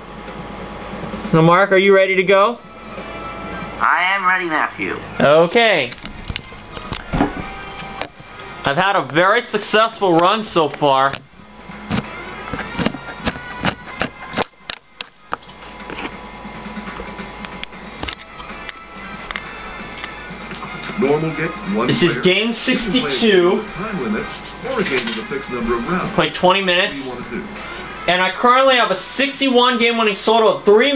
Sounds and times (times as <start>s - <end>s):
Music: 2.4s - 30.9s
Speech: 8.7s - 11.2s, 21.0s - 27.5s, 28.1s - 30.9s.